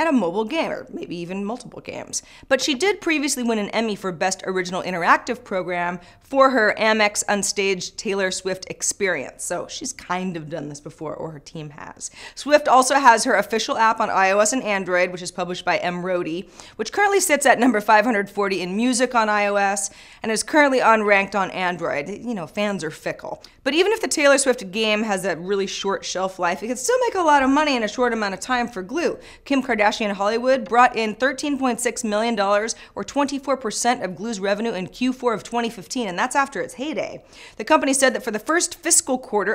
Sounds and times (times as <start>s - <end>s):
Inside, small room: 0.0s - 39.5s
Speech: 0.0s - 39.5s.